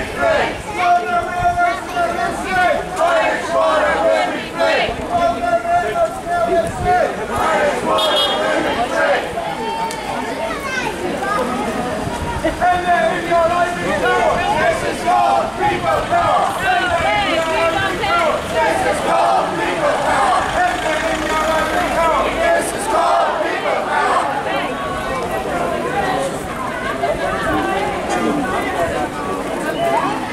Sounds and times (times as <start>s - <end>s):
Speech: 0.0s - 30.3s.